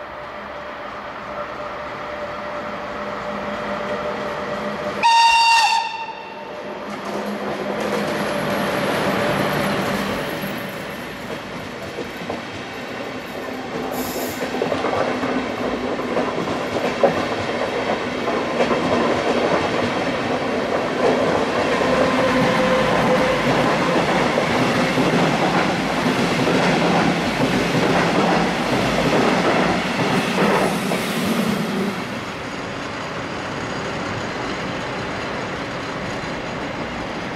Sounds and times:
Railroad car, train wagon: 0.0s - 37.3s
Subway, metro, underground: 0.0s - 37.3s
Train: 0.0s - 37.3s
Clickety-clack: 6.8s - 37.3s.

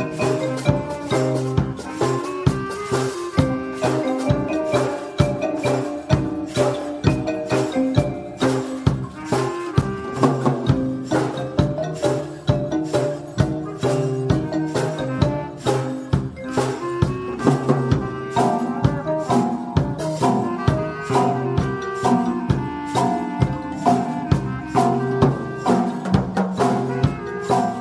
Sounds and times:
Blues: 0.0s - 27.8s.

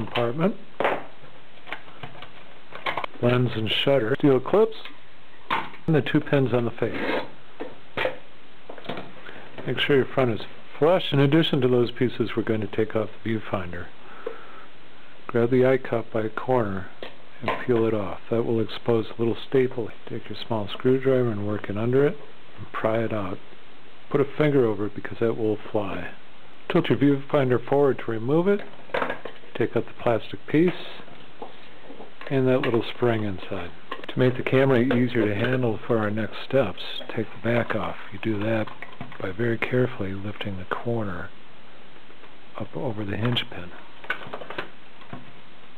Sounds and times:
Speech: 0.0s - 0.6s, 3.2s - 5.0s, 5.8s - 7.3s, 9.6s - 14.0s, 15.3s - 23.4s, 24.1s - 28.7s, 29.5s - 31.2s, 32.2s - 41.4s, 42.6s - 43.9s.

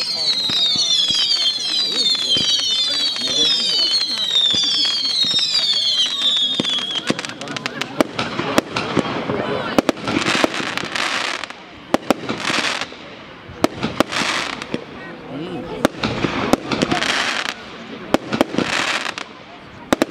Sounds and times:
Speech: 0.0s - 10.1s, 14.7s - 20.1s
Fireworks: 0.0s - 20.1s.

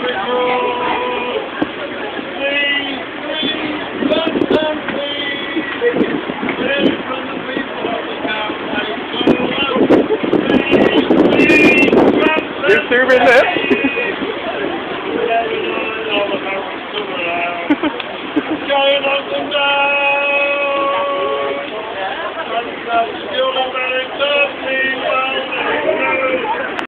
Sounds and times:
Male singing: 0.0s - 1.7s, 2.3s - 14.3s, 15.1s - 26.8s
Speech: 12.2s - 17.7s, 20.4s - 26.8s.

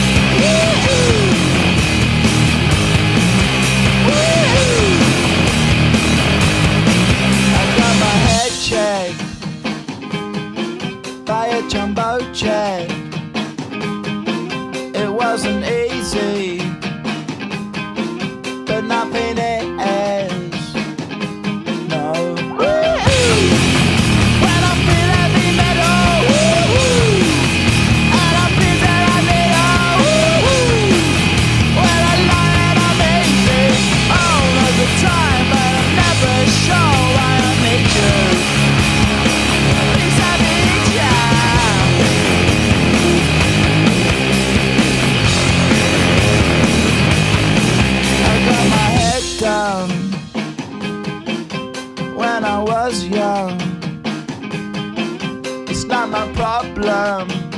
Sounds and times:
Music: 0.0s - 57.5s.

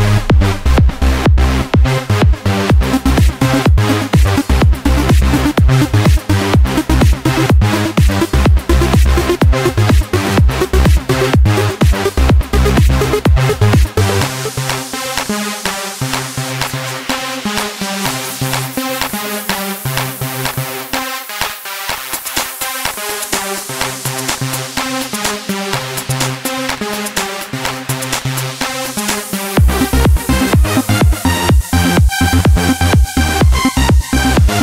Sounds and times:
Sound effect: 0.0s - 24.8s
Music: 0.0s - 34.6s.

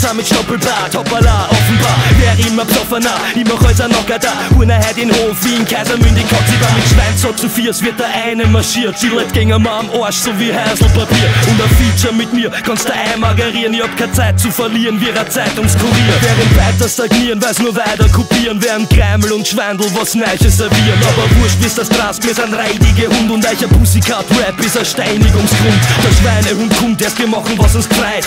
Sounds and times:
Music: 0.0s - 28.2s.

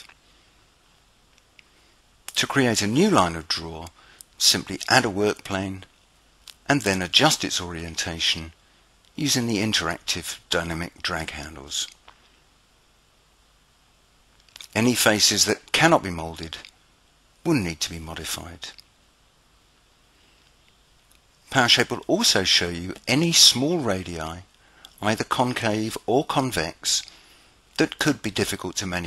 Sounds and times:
Speech: 2.3s - 5.9s, 6.6s - 8.6s, 9.2s - 12.0s, 14.6s - 16.7s, 17.4s - 18.8s, 21.5s - 27.1s, 27.8s - 29.0s.

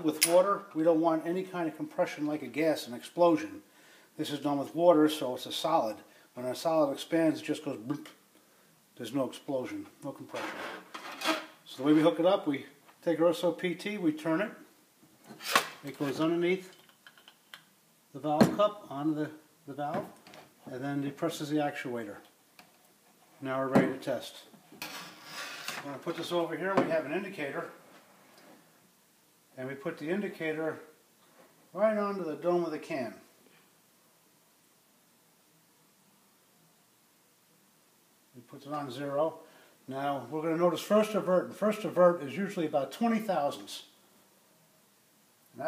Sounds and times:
Speech: 0.0s - 8.2s, 9.0s - 10.6s, 11.7s - 14.7s, 15.8s - 16.7s, 18.1s - 22.3s, 23.4s - 24.5s, 25.8s - 27.8s, 29.6s - 30.9s, 31.7s - 33.3s, 38.3s - 44.0s.

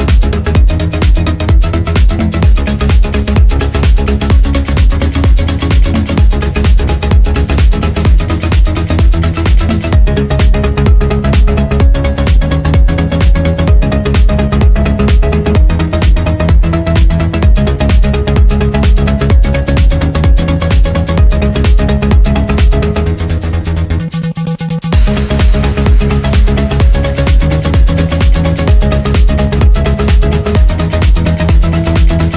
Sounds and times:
Trance music: 0.0s - 32.3s.

